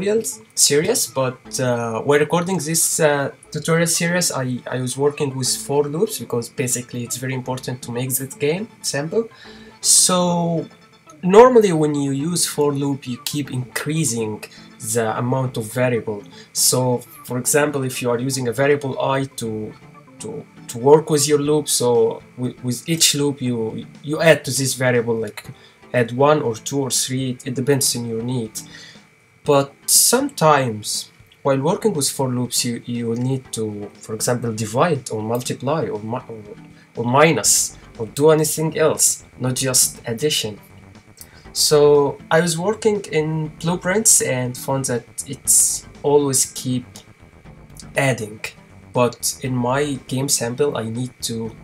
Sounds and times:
Speech: 0.0 - 28.7, 29.5 - 40.6, 41.5 - 47.0, 47.8 - 51.6
Music: 0.0 - 51.6.

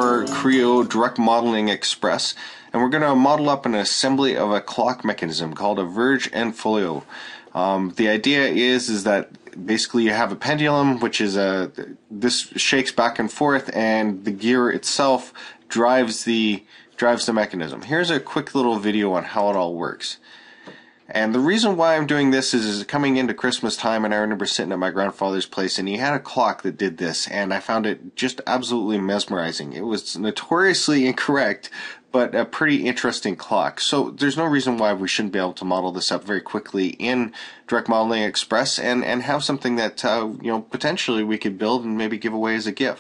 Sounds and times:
Speech: 0.0 - 20.4, 21.1 - 43.0.

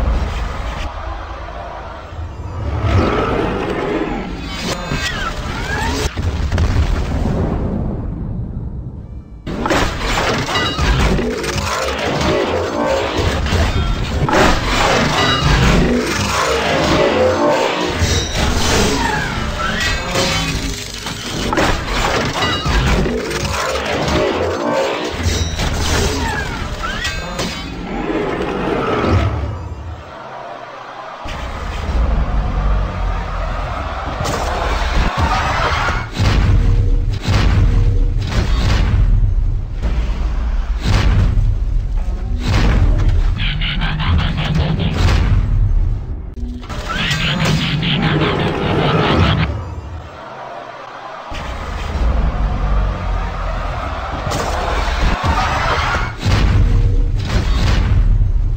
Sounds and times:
Outside, urban or manmade: 0.0 - 58.5.

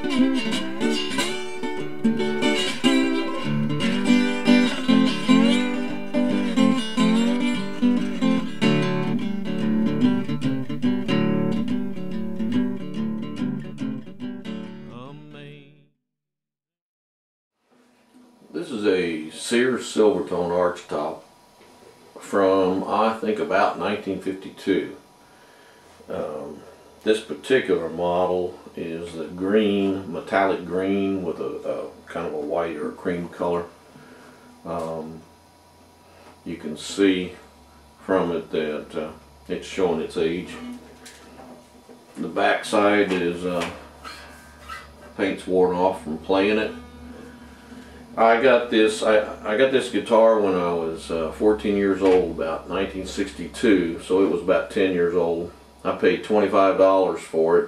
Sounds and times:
Speech: 14.9 - 15.9, 18.5 - 21.3, 22.2 - 25.0, 26.1 - 33.8, 34.6 - 35.3, 36.4 - 40.7, 42.2 - 43.8, 45.2 - 46.8, 48.2 - 57.6.

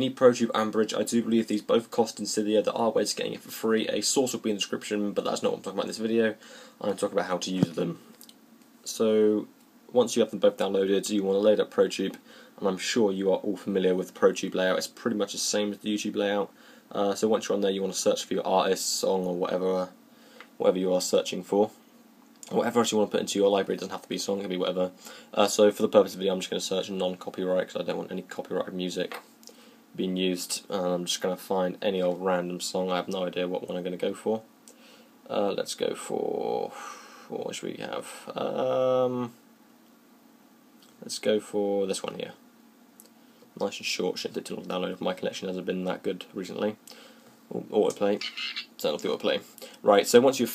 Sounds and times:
Speech: 0.0 - 8.1, 8.8 - 20.0, 20.6 - 21.8, 22.4 - 29.2, 30.0 - 34.5, 35.3 - 39.4, 40.8 - 42.4, 43.6 - 46.8, 47.5 - 50.5.

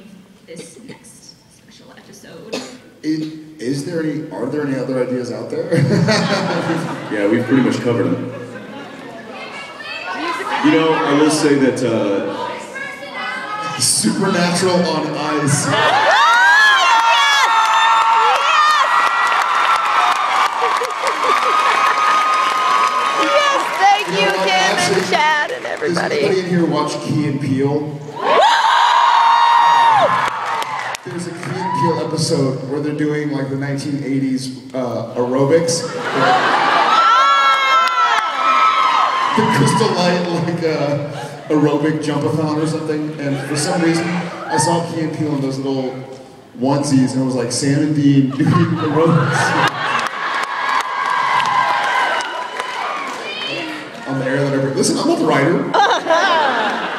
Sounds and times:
Cheering: 9.3 - 26.4, 28.1 - 32.4, 35.9 - 41.9, 43.2 - 45.1, 48.3 - 56.9.

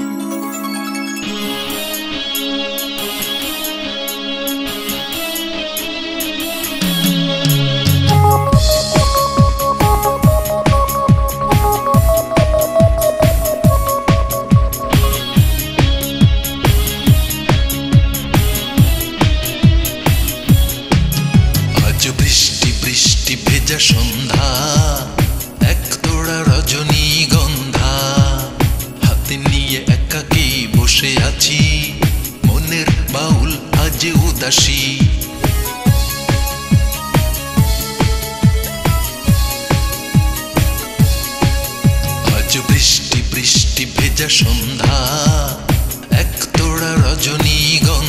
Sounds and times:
Music: 0.0 - 48.0.

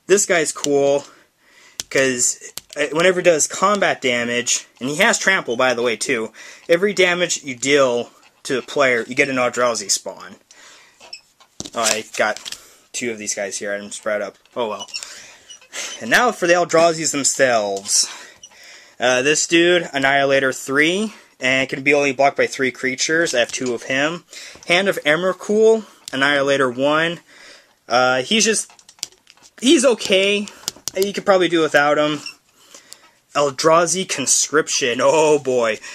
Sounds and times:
Speech: 0.1 - 1.2, 1.9 - 10.4, 11.7 - 15.0, 15.9 - 18.2, 19.0 - 27.2, 27.9 - 28.7, 29.6 - 32.4, 33.3 - 35.9.

